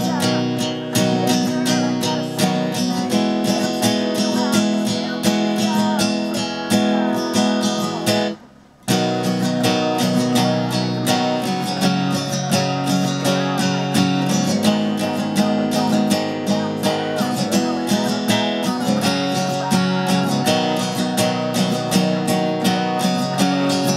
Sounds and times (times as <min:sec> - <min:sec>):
Acoustic guitar: 0:00.0 - 0:23.9
Strum: 0:00.0 - 0:23.9.